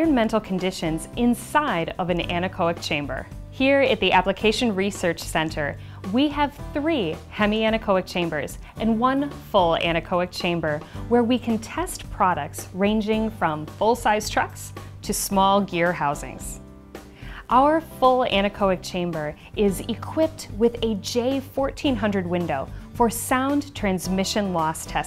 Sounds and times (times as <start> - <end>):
Speech: 0.0 - 16.6, 17.5 - 25.0
Music: 0.0 - 25.0.